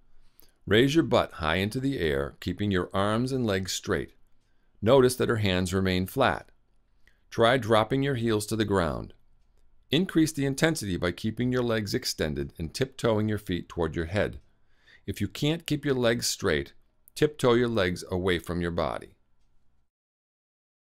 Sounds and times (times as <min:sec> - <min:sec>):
Speech: 0:00.7 - 0:04.2, 0:04.8 - 0:06.6, 0:07.3 - 0:09.2, 0:09.9 - 0:19.2.